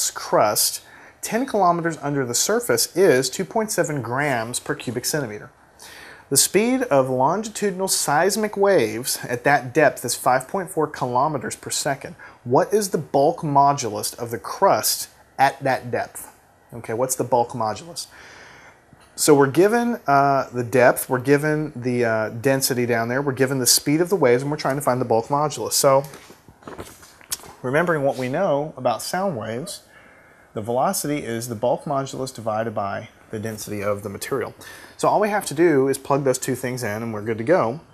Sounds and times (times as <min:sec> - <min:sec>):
Speech: 0:00.0 - 0:05.5, 0:06.3 - 0:18.2, 0:19.2 - 0:26.2, 0:27.6 - 0:29.9, 0:30.6 - 0:37.9.